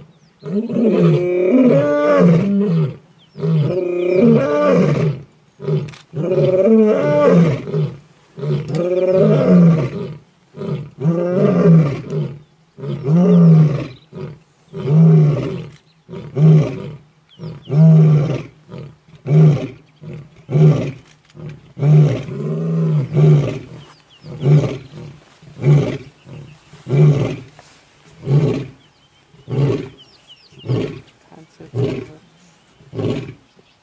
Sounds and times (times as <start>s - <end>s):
Roar: 0.0s - 27.5s, 28.2s - 28.8s, 29.4s - 31.1s, 31.7s - 32.2s, 32.9s - 33.4s.